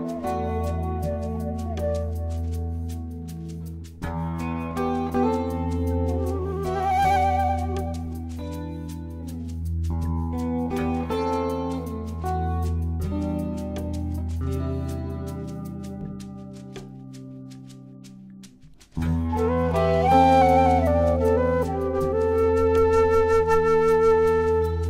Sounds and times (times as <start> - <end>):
Flute: 0.0 - 9.6, 19.0 - 24.8
Jazz: 0.0 - 24.8.